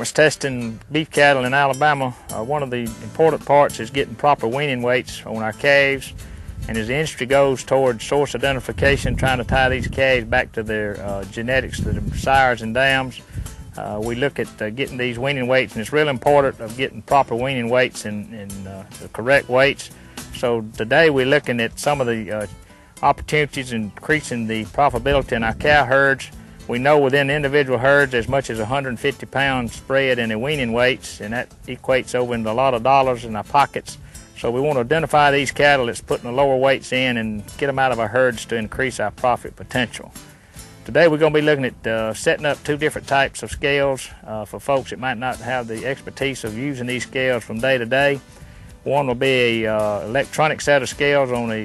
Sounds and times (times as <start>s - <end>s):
Speech: 0.0s - 13.2s, 13.8s - 40.2s, 40.9s - 48.2s, 48.9s - 51.6s
Music: 0.0s - 51.6s.